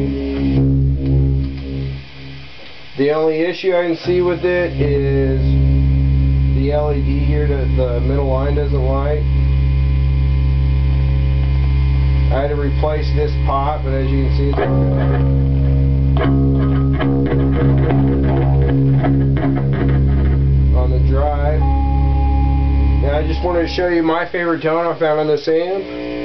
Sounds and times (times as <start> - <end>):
Speech: 3.0 - 5.6, 6.6 - 9.3, 12.3 - 15.0, 20.7 - 21.6, 23.0 - 25.9.